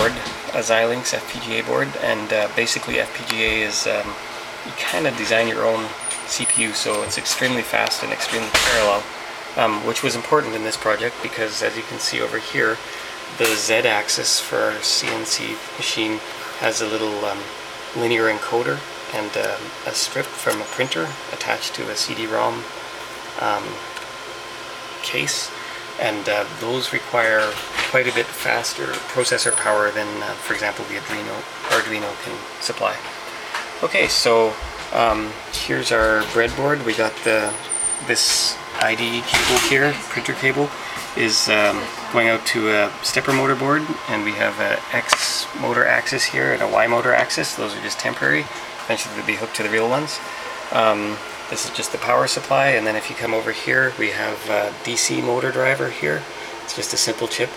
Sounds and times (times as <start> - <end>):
Speech: 0.0 - 22.7, 23.4 - 23.9, 25.0 - 33.1, 33.8 - 57.5
Printer: 0.0 - 57.5.